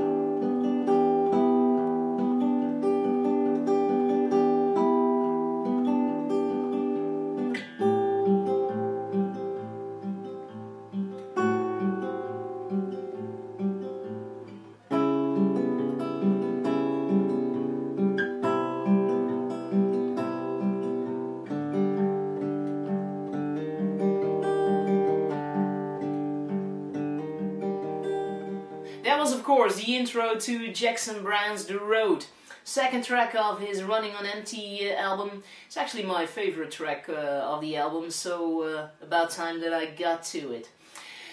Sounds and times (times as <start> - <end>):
Acoustic guitar: 0.0 - 41.3.